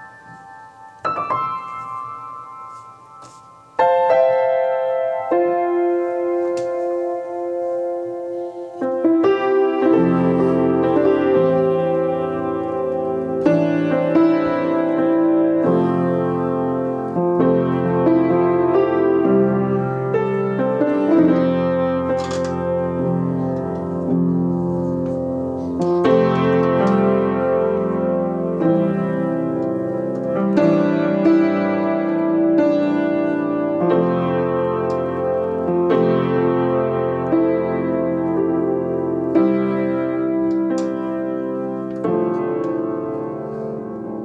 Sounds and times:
Music: 0.0s - 44.2s.

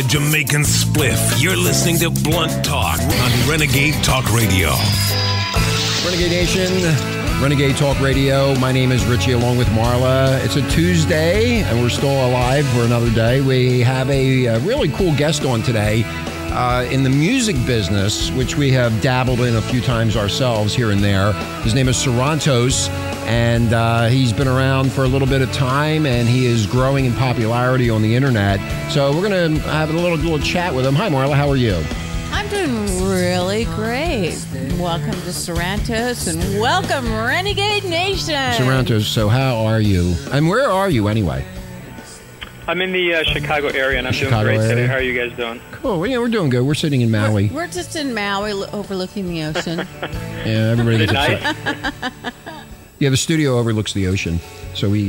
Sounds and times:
Speech: 0.0s - 5.1s, 6.0s - 41.5s, 42.7s - 51.6s, 53.0s - 55.0s
Music: 0.0s - 55.0s.

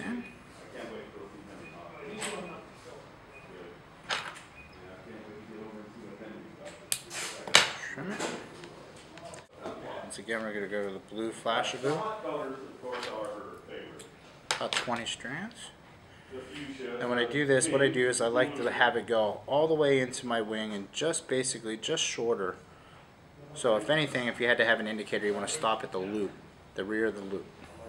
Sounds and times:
Speech: 9.2s - 22.6s, 23.5s - 27.8s.

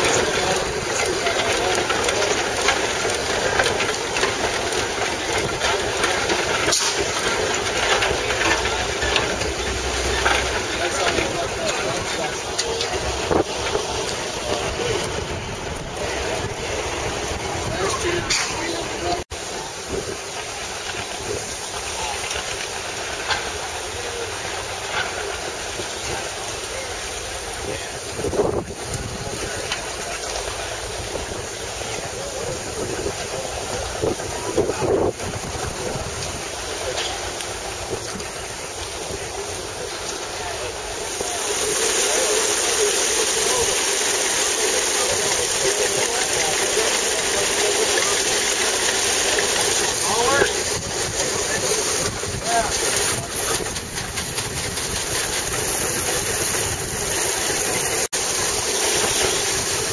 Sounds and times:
Speech: 0.0s - 54.0s
Engine: 0.0s - 59.9s
Vehicle: 0.0s - 59.9s.

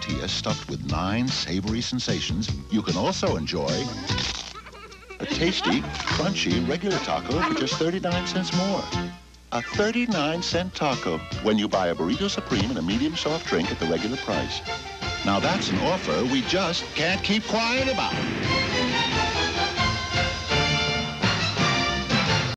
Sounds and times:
Speech: 0.0s - 4.1s, 5.2s - 8.9s, 9.6s - 14.6s, 15.2s - 18.2s
Music: 0.0s - 22.5s.

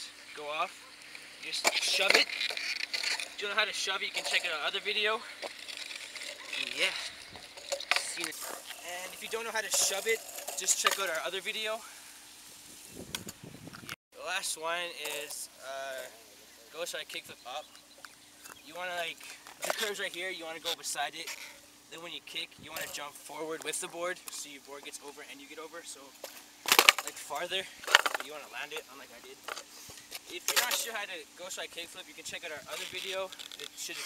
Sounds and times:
Speech: 0.0s - 0.7s, 1.4s - 2.3s, 3.4s - 5.3s, 6.5s - 7.1s, 7.9s - 11.8s, 14.2s - 17.7s, 18.6s - 26.1s, 27.0s - 29.4s, 30.3s - 34.0s
Skateboard: 1.0s - 11.2s, 19.2s - 21.6s, 26.3s - 31.0s.

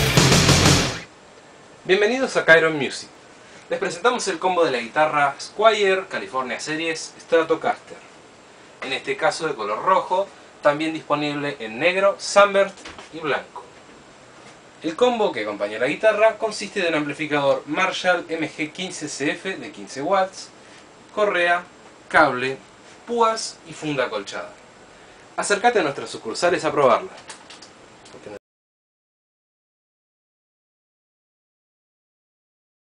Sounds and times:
Speech: 1.8s - 8.1s, 8.8s - 13.8s, 14.8s - 24.6s, 25.4s - 27.3s, 28.1s - 28.4s.

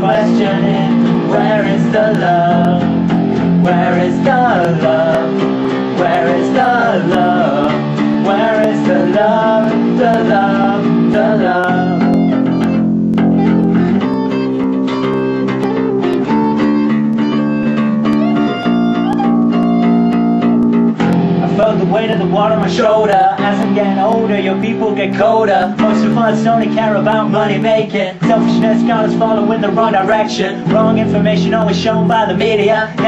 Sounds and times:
Singing: 0.0s - 12.7s, 21.4s - 33.0s
Bass guitar: 0.0s - 33.0s.

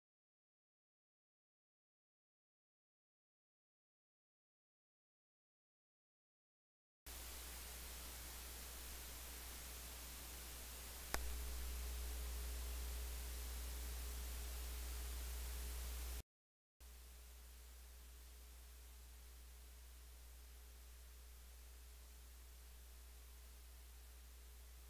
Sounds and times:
White noise: 7.1s - 16.2s, 16.8s - 24.9s.

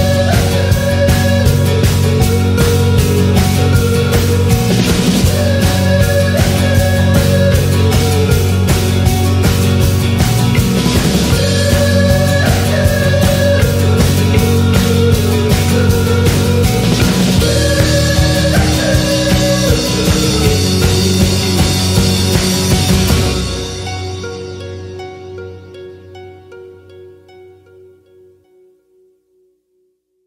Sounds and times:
Rock music: 0.0s - 26.2s.

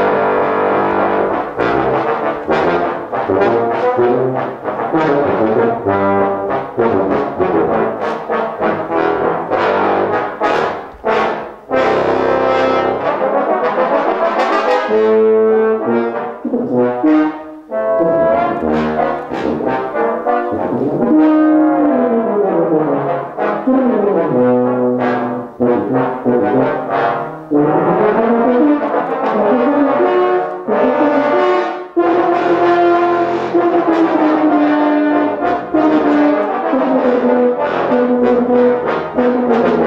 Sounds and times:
Brass instrument: 0.0s - 39.8s.

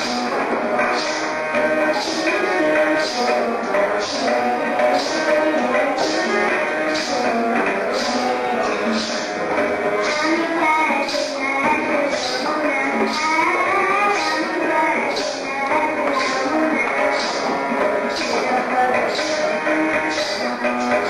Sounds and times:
Child singing: 0.0s - 21.0s
Music: 0.0s - 21.0s.

